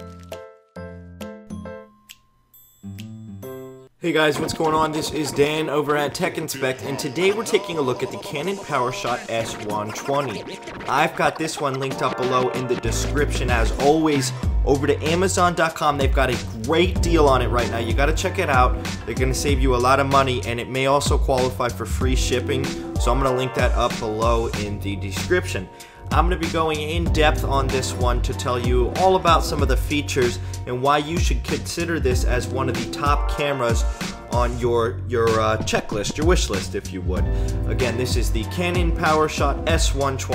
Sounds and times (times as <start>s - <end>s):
Music: 0.0s - 40.3s
Speech: 4.0s - 40.3s.